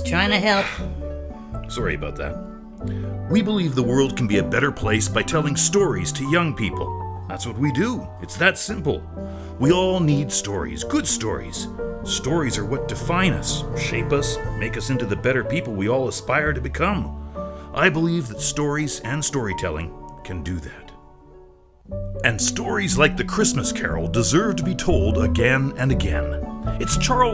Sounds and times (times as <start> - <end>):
Speech: 0.0 - 0.8, 1.7 - 2.4, 3.3 - 9.0, 9.6 - 17.1, 17.8 - 21.0, 22.2 - 27.3
Music: 0.0 - 27.3.